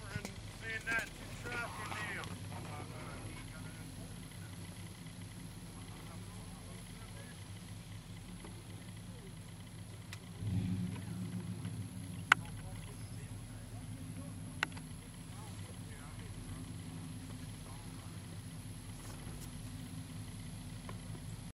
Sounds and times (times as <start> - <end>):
Vehicle: 0.0 - 21.5.